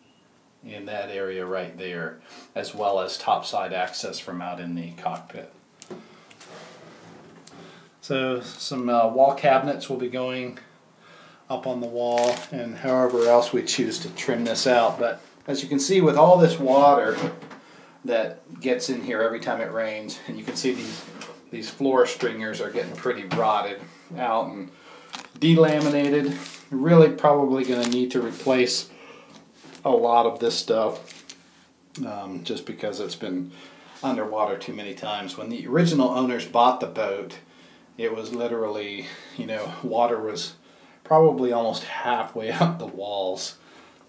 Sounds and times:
Inside, small room: 0.0s - 44.0s
Speech: 0.6s - 5.6s, 8.0s - 10.7s, 11.5s - 17.4s, 18.0s - 24.8s, 25.4s - 28.9s, 29.8s - 31.1s, 32.0s - 43.6s.

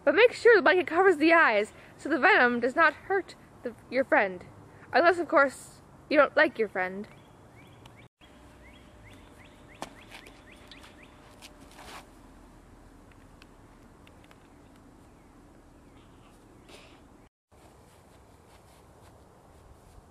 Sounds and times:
Speech: 0.0s - 7.1s
Outside, urban or manmade: 0.0s - 20.1s.

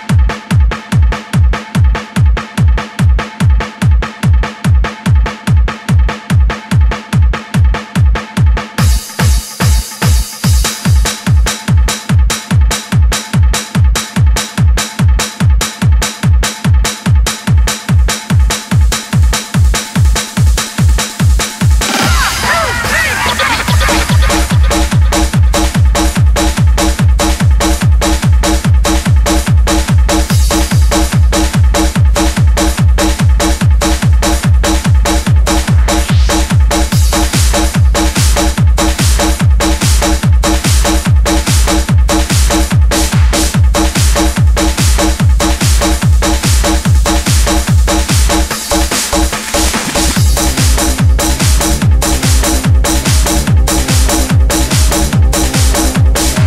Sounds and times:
Music: 0.0s - 56.4s.

